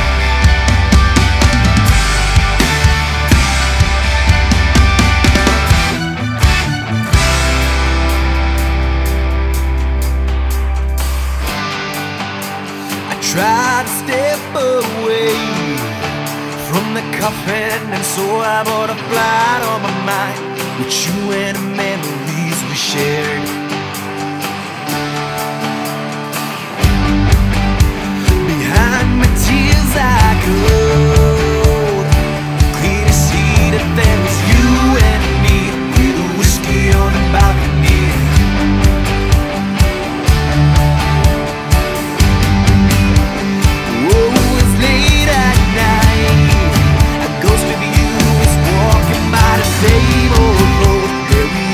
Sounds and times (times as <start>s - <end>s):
Music: 0.0s - 51.7s.